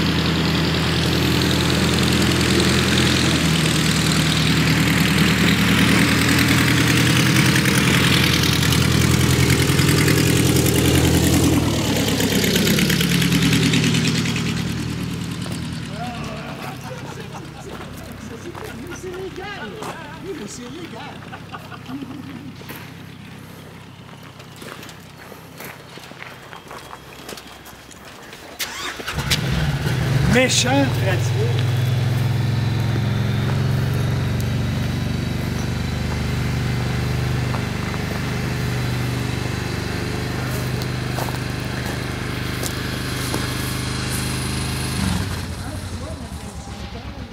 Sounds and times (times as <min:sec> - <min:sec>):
Outside, urban or manmade: 0:00.0 - 0:47.3
Speech: 0:15.9 - 0:21.2, 0:30.3 - 0:31.6, 0:45.5 - 0:47.3.